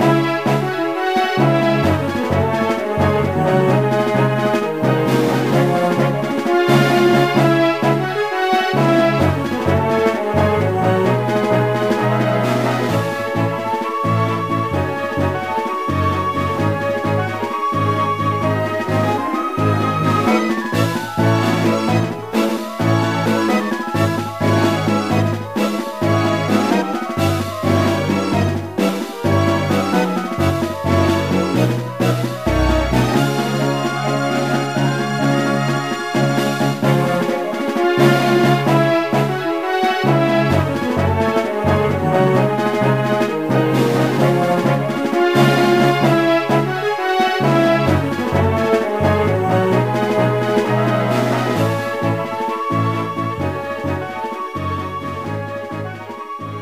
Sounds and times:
Soundtrack music: 32.0 - 34.6.

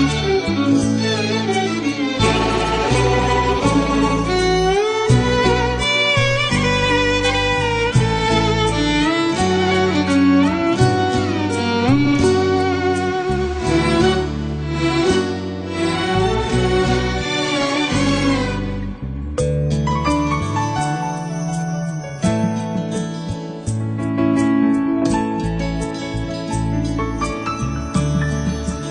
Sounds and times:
Violin, fiddle: 0.0 - 19.2.

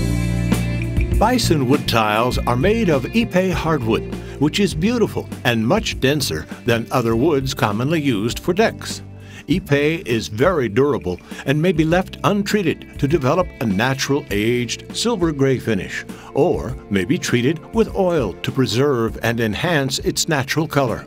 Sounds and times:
Music: 0.0 - 21.0
Speech: 1.2 - 21.0.

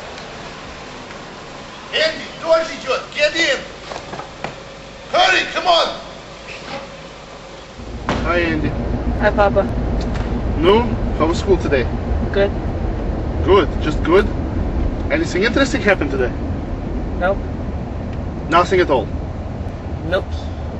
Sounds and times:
Car: 0.0 - 20.8
Speech: 1.9 - 3.7, 5.1 - 6.1, 8.2 - 9.7, 10.6 - 12.6, 13.4 - 14.3, 15.1 - 16.4, 17.2 - 17.4, 18.5 - 19.1, 20.0 - 20.6.

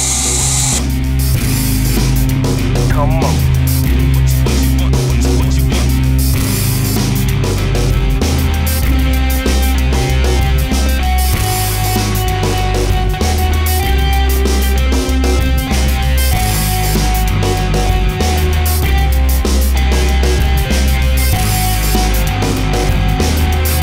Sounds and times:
Music: 0.0 - 23.8.

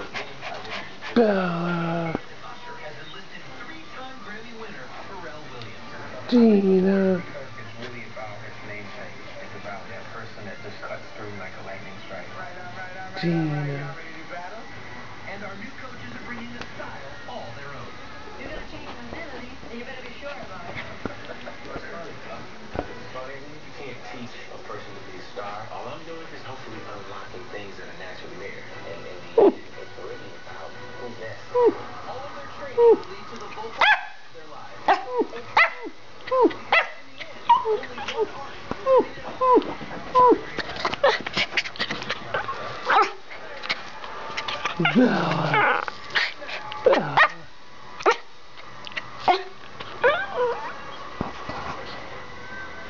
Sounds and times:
Bow-wow: 33.8 - 34.2, 34.9 - 35.9, 46.8 - 47.4, 48.0 - 48.3
Bark: 33.8 - 34.3, 34.9 - 35.9, 36.7 - 37.8, 42.9 - 43.2, 46.9 - 47.4, 48.0 - 48.3
Whimper (dog): 50.0 - 51.0.

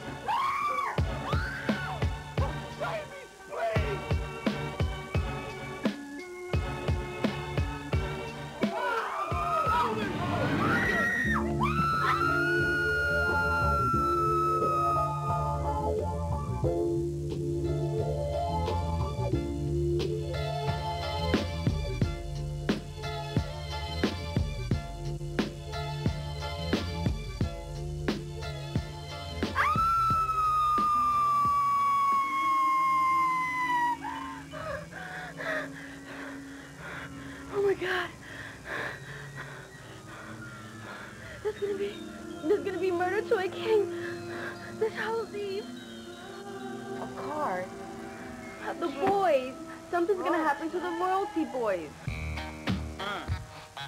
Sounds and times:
Music: 0.0 - 53.8.

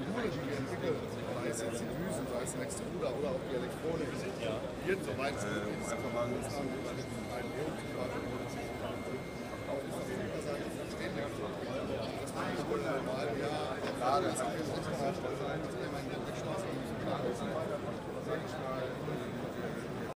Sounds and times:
Speech: 0.0 - 20.1.

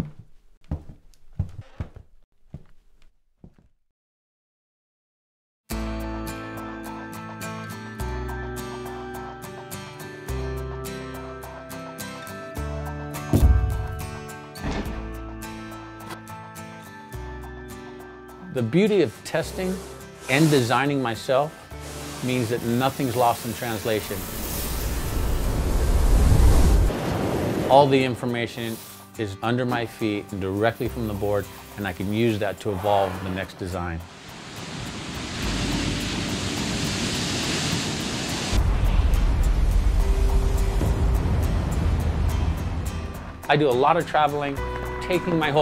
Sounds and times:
Music: 5.7 - 25.6, 27.7 - 34.4, 35.1 - 37.0, 38.5 - 45.6.

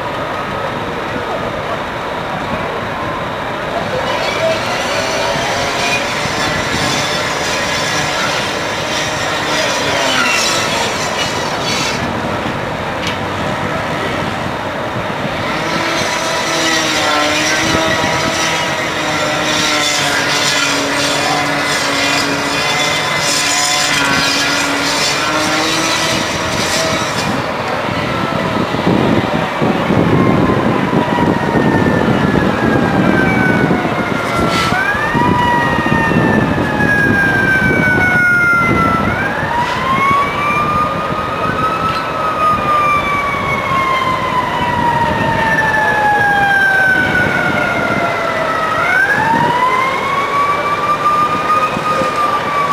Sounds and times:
Fire engine, fire truck (siren): 0.0 - 52.7
Outside, urban or manmade: 0.0 - 52.7.

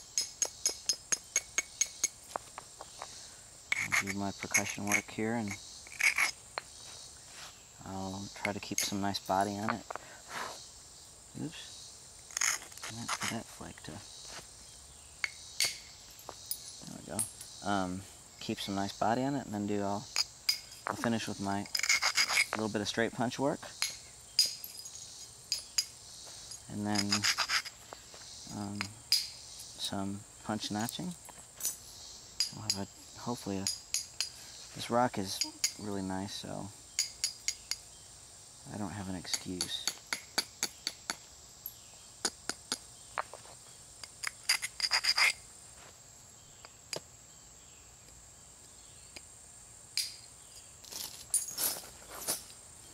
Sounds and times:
Speech: 4.0 - 5.6, 7.8 - 9.9, 11.4 - 11.7, 12.9 - 14.1, 16.8 - 20.1, 20.9 - 21.7, 22.6 - 23.7, 26.7 - 27.3, 28.5 - 28.9, 29.8 - 31.2, 32.5 - 33.7, 34.8 - 36.8, 38.7 - 39.9.

